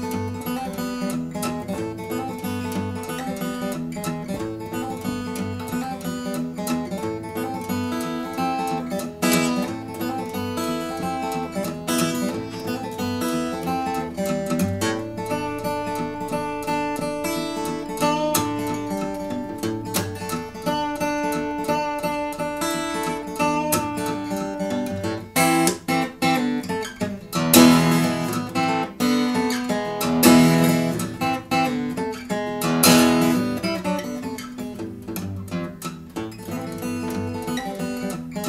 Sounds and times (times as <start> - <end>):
Strum: 0.0 - 38.4.